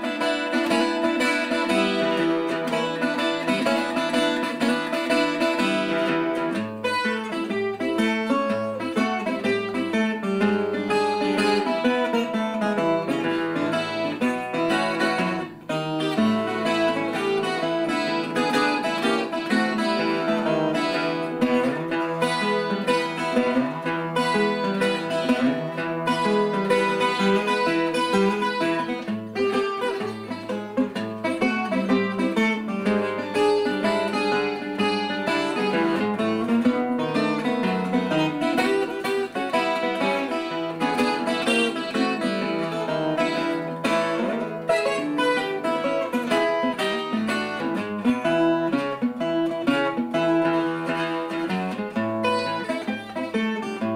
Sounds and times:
Blues: 0.0 - 53.9
Guitar: 0.0 - 53.9.

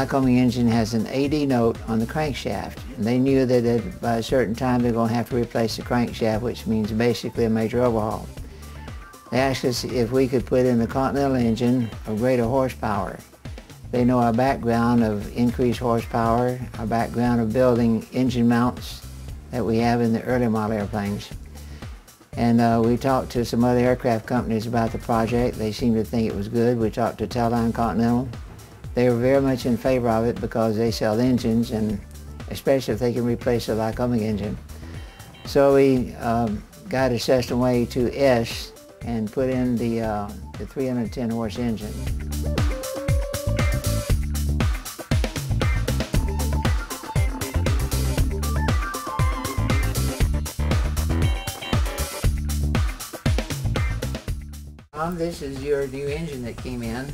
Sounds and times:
Speech: 0.0 - 8.4, 9.3 - 13.2, 13.9 - 21.4, 22.4 - 28.4, 29.0 - 34.6, 35.5 - 42.1, 55.0 - 57.1
Music: 0.0 - 57.1.

